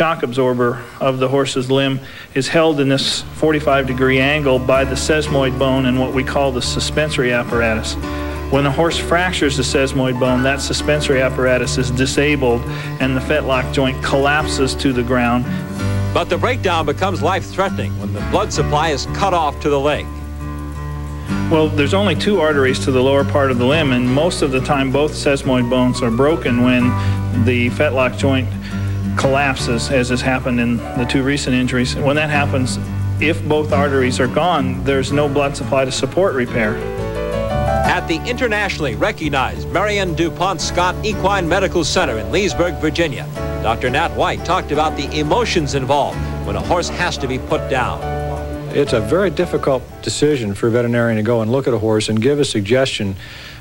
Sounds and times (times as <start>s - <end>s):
Speech: 0.0s - 15.5s, 16.2s - 20.1s, 21.5s - 28.6s, 29.2s - 36.8s, 37.9s - 48.1s, 48.7s - 53.2s
Music: 0.0s - 53.6s.